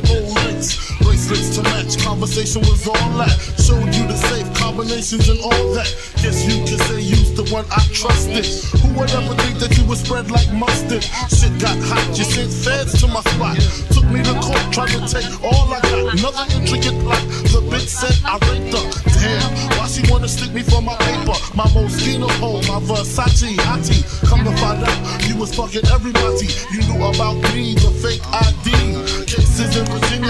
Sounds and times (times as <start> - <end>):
Music: 0.0 - 30.2.